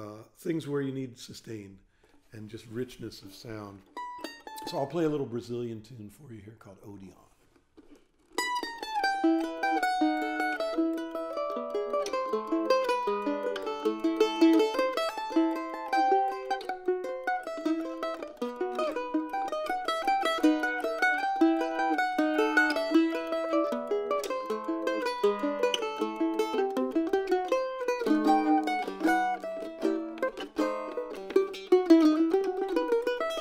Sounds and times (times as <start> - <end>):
Speech: 0.0 - 3.9, 4.6 - 7.4
Mandolin: 0.0 - 33.4.